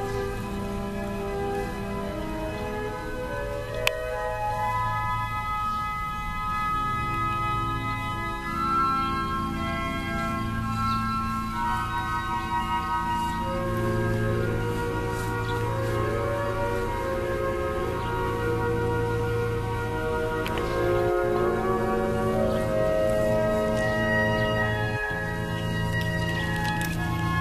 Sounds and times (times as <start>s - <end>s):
Music: 0.0s - 27.4s.